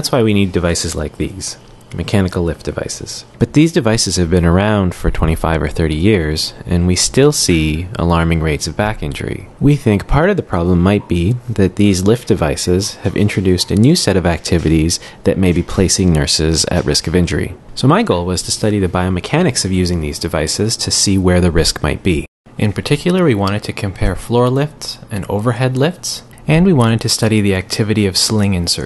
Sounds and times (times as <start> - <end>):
Speech: 0.0 - 28.8.